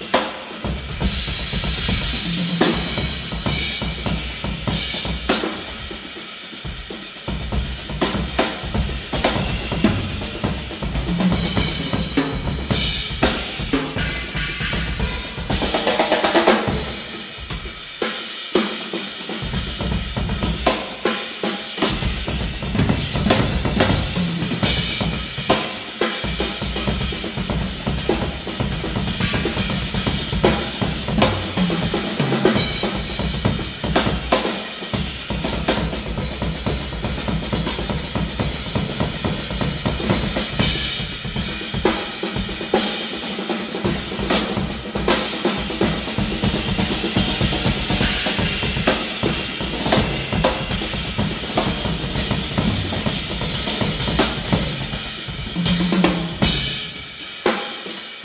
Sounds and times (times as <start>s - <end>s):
Drum kit: 0.0s - 58.2s
Bass drum: 7.3s - 15.9s, 21.9s - 25.6s, 45.6s - 57.1s.